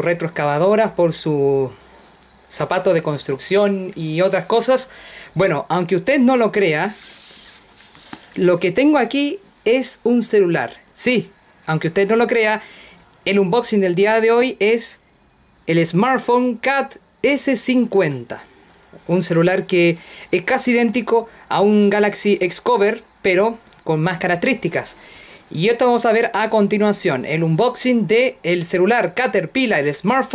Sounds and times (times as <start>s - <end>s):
Speech: 0.0s - 1.8s, 2.5s - 7.0s, 8.4s - 12.6s, 13.2s - 15.0s, 15.7s - 30.3s.